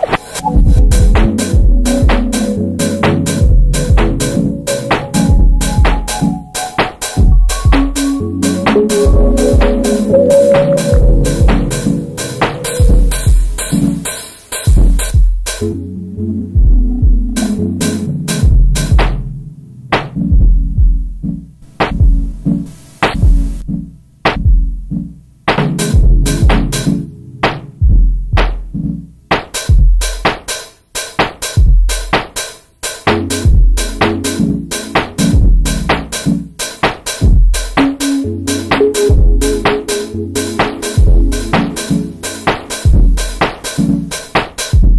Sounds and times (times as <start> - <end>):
Drum: 0.0 - 15.7, 16.6 - 19.4, 20.0 - 44.9.